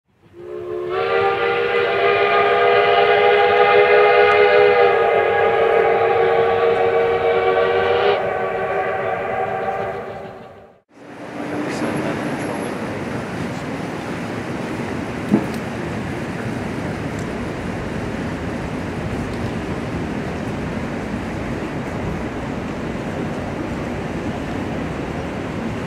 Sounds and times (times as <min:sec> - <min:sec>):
Train whistle: 0:00.2 - 0:12.1.